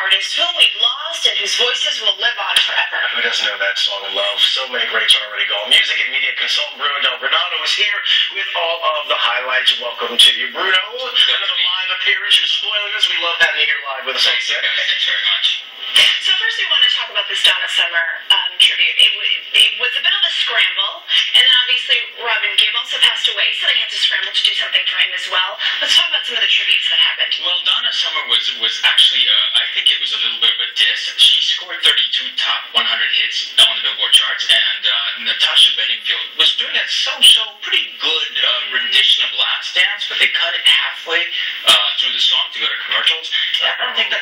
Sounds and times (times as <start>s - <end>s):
Speech: 0.0s - 44.2s.